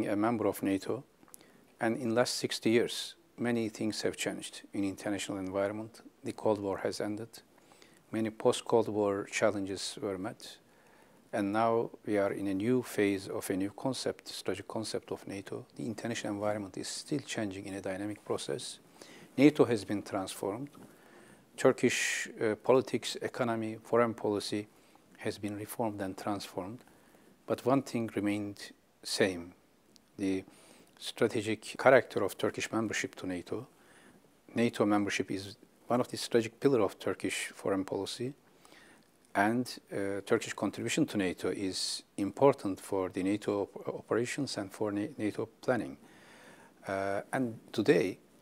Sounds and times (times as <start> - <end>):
Speech: 0.0 - 1.1, 1.8 - 7.5, 8.1 - 10.6, 11.3 - 18.8, 19.4 - 20.8, 21.6 - 26.8, 27.5 - 29.6, 30.2 - 33.7, 34.5 - 38.4, 39.3 - 46.0, 46.8 - 48.2.